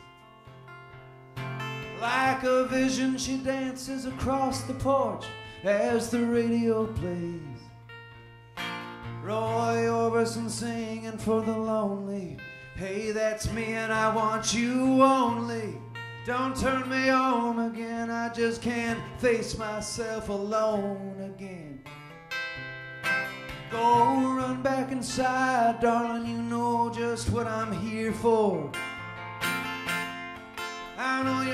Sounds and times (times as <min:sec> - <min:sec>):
Music: 0:00.0 - 0:31.5.